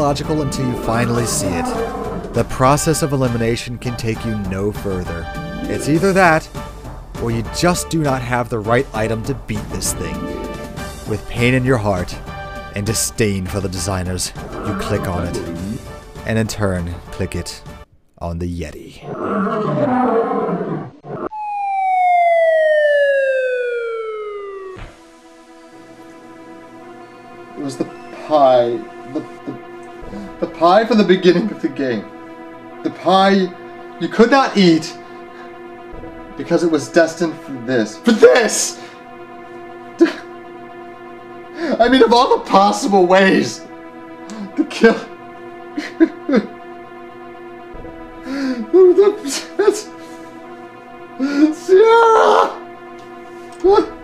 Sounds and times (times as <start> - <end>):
Speech: 0.0 - 1.8, 2.4 - 6.5, 7.2 - 10.2, 11.1 - 12.2, 12.8 - 17.6, 18.2 - 19.1, 27.6 - 29.3, 30.4 - 32.1, 32.9 - 35.0, 36.4 - 38.8, 41.8 - 43.7, 44.6 - 45.1, 48.8 - 49.9, 53.6 - 53.9
Music: 0.0 - 19.0, 21.6 - 54.0.